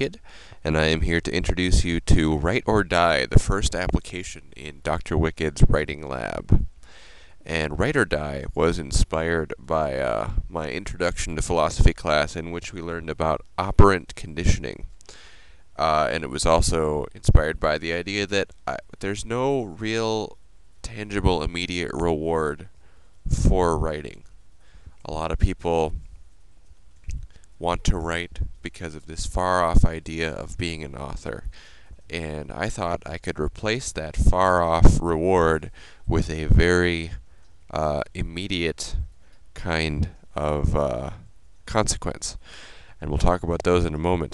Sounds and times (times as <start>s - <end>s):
Speech: 0.0s - 6.7s, 7.5s - 14.9s, 15.8s - 22.7s, 23.3s - 24.3s, 25.0s - 26.1s, 27.6s - 31.5s, 32.1s - 42.4s, 43.0s - 44.3s.